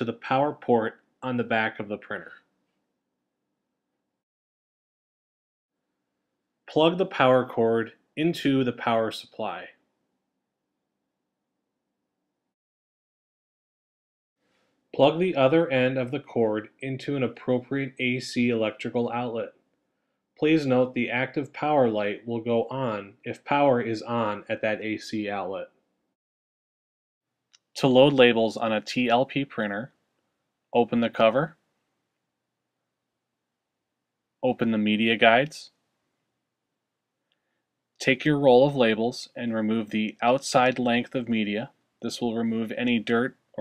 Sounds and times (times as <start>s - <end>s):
Speech: 0.0s - 2.5s, 6.7s - 9.8s, 15.0s - 19.6s, 20.4s - 25.8s, 27.8s - 30.0s, 30.8s - 31.6s, 34.4s - 35.8s, 38.0s - 43.6s.